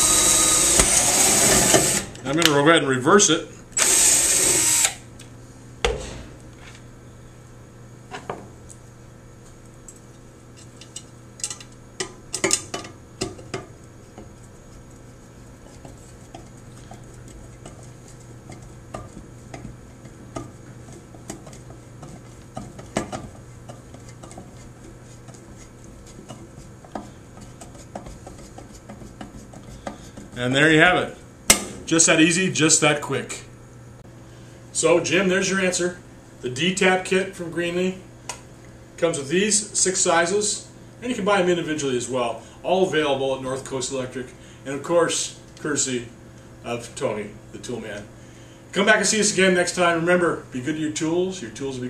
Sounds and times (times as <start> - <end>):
Drill: 0.0 - 2.2, 3.8 - 5.0.